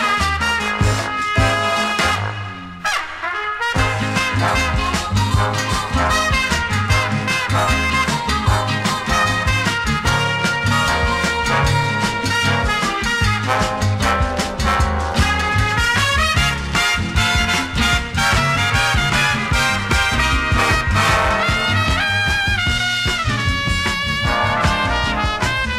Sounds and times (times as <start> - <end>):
Swing music: 0.0 - 25.7.